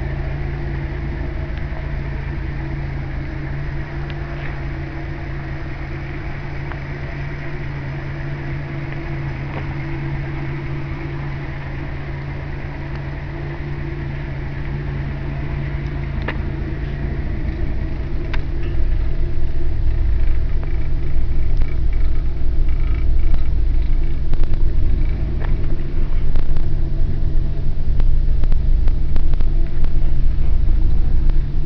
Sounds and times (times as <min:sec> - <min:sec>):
Car: 0:00.0 - 0:31.6.